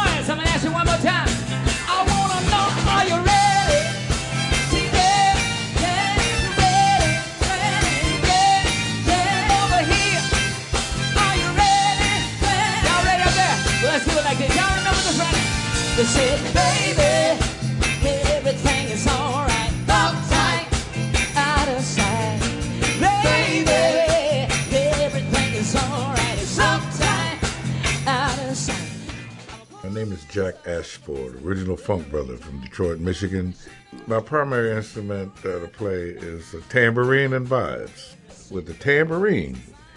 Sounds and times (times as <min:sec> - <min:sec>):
Music: 0:00.0 - 0:39.9.